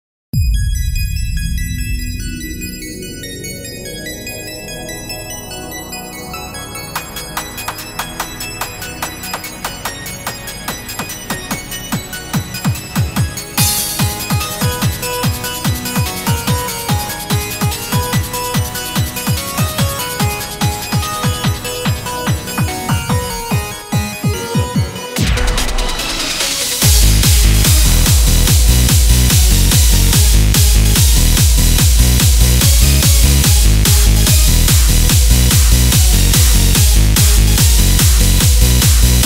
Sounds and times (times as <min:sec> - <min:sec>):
Techno: 0:00.4 - 0:39.2.